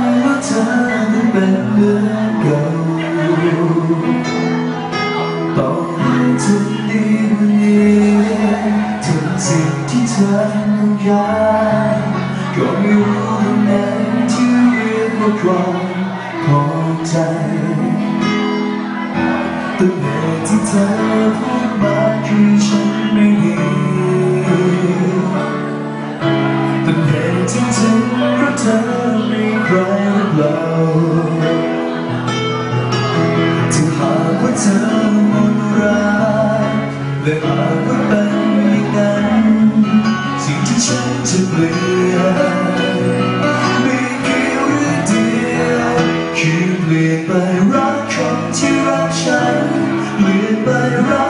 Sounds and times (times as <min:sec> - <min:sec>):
Music: 0:00.0 - 0:51.2.